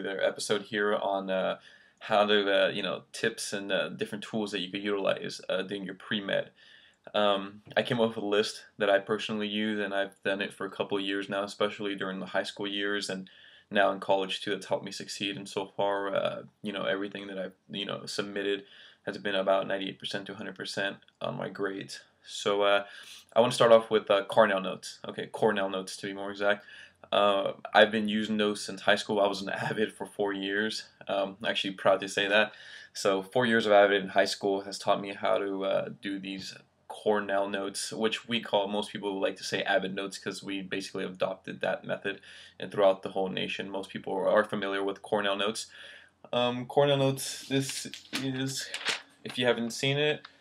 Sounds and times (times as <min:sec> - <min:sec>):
Speech: 0:00.0 - 0:50.3.